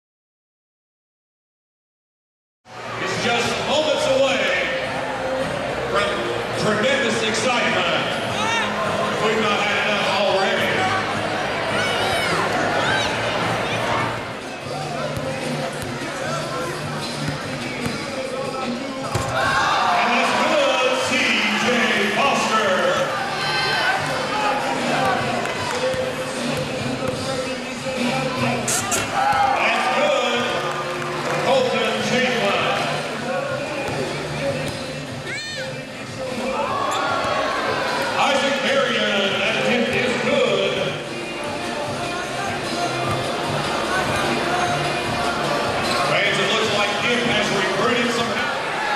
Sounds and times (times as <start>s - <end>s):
Speech: 19.9s - 23.7s, 31.4s - 34.2s, 38.2s - 41.1s, 43.8s - 48.6s.